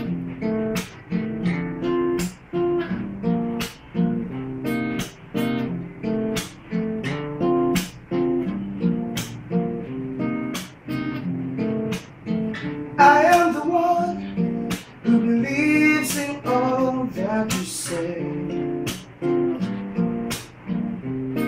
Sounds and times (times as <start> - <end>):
Inside, small room: 0.0 - 21.4
Music: 0.0 - 21.4.